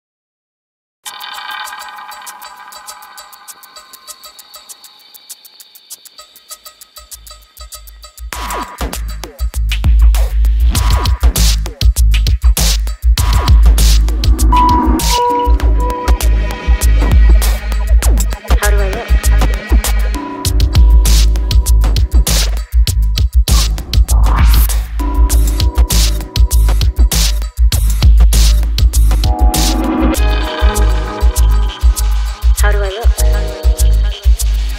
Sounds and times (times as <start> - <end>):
Music: 1.1 - 34.7.